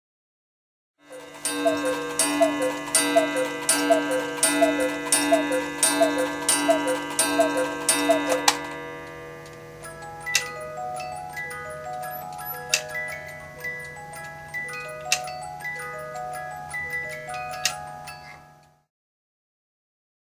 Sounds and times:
Music: 1.0s - 18.9s.

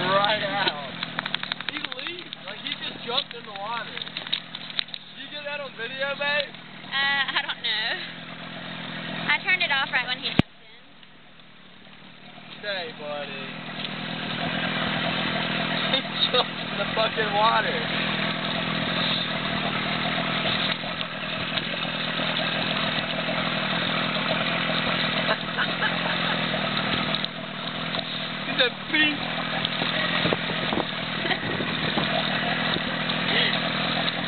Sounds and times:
Boat, Water vehicle: 0.0s - 34.2s
Outside, rural or natural: 0.0s - 34.2s.

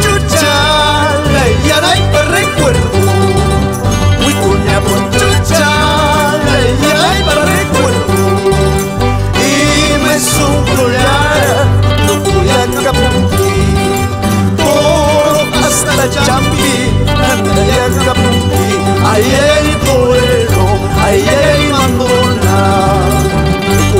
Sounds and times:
Music: 0.0s - 24.0s.

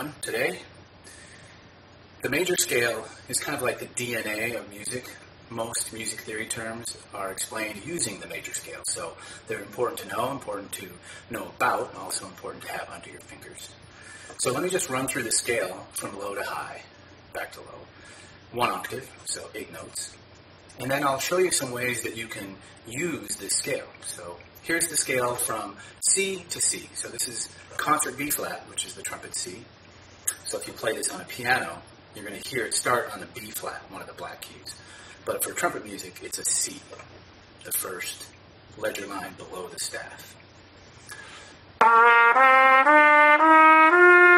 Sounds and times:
Speech: 0.0s - 0.7s, 2.2s - 13.8s, 14.4s - 17.9s, 18.5s - 20.2s, 20.8s - 29.7s, 30.3s - 40.4s.

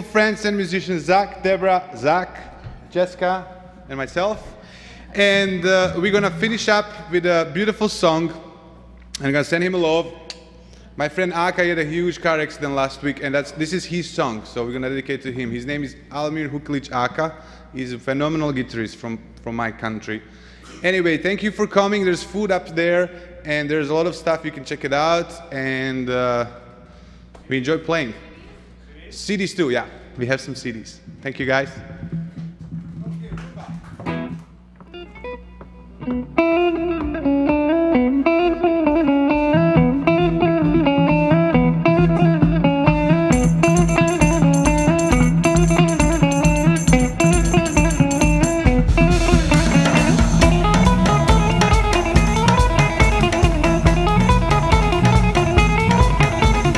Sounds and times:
Speech: 0.0s - 4.5s, 5.2s - 8.4s, 9.2s - 10.2s, 11.0s - 26.6s, 27.4s - 31.9s
Music: 5.2s - 7.5s, 31.1s - 56.7s.

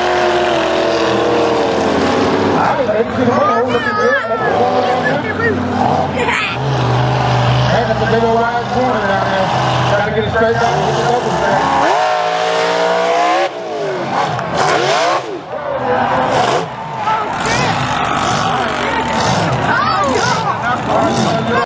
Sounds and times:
Truck: 0.0s - 21.6s.

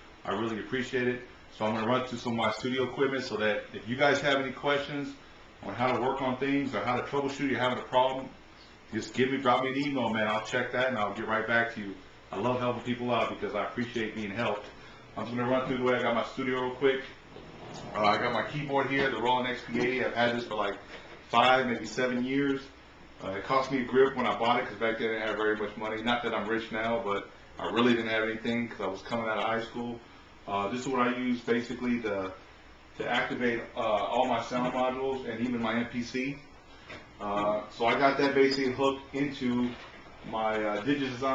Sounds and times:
Speech: 0.2s - 17.2s, 17.9s - 32.4s, 33.0s - 36.5s, 37.2s - 41.3s.

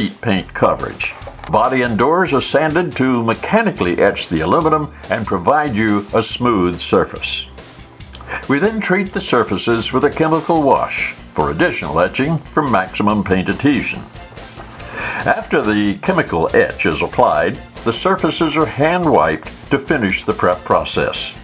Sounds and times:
Speech: 0.0s - 7.5s, 8.3s - 14.1s, 15.2s - 21.4s
Music: 0.0s - 21.4s.

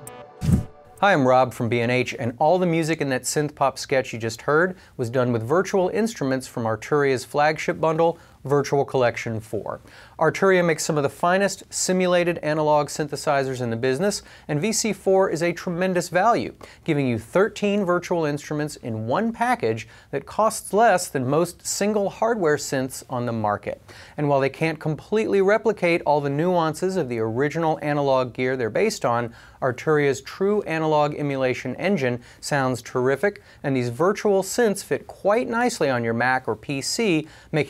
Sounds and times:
Speech: 1.0s - 37.6s.

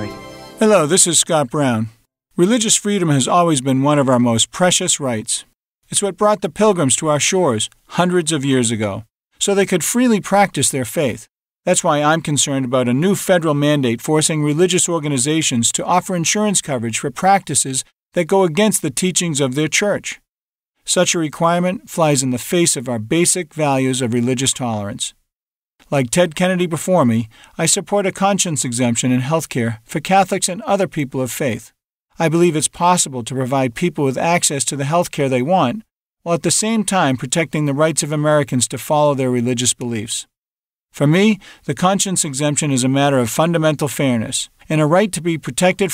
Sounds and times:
Speech: 0.0s - 25.2s, 25.8s - 40.3s, 41.0s - 45.9s.

